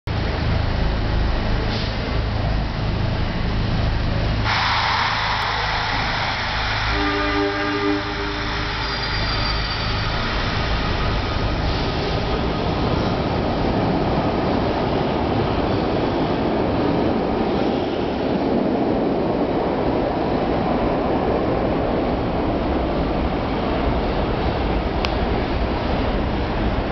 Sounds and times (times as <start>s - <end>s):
Railroad car, train wagon: 0.1s - 26.9s
Subway, metro, underground: 0.1s - 26.9s
Train: 0.1s - 26.9s
Train wheels squealing: 5.1s - 12.2s.